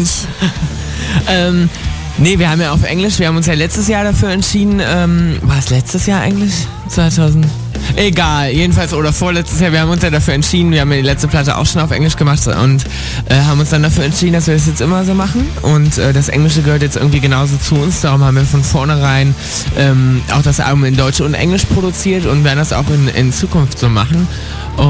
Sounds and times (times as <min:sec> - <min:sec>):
Music: 0:00.0 - 0:24.8
Speech: 0:00.0 - 0:24.8.